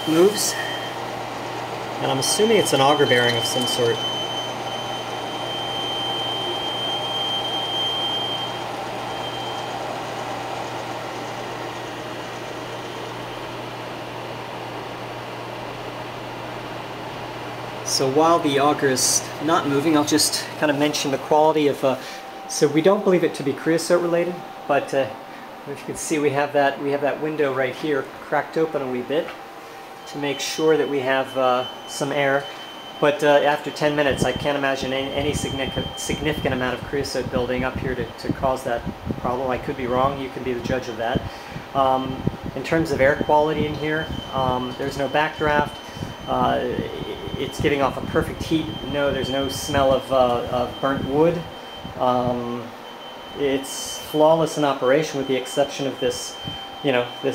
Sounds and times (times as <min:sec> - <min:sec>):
Speech: 0:00.0 - 0:00.8, 0:02.0 - 0:04.1, 0:17.8 - 0:29.4, 0:30.1 - 0:52.7, 0:53.4 - 0:57.3.